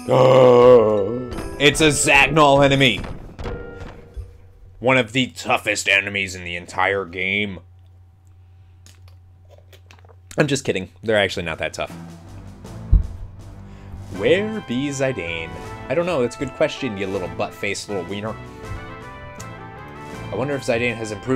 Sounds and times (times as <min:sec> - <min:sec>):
Music: 0:00.0 - 0:04.7, 0:11.3 - 0:21.3
Speech: 0:01.6 - 0:03.0, 0:04.8 - 0:07.6, 0:10.3 - 0:11.9, 0:14.2 - 0:18.4, 0:20.3 - 0:21.3.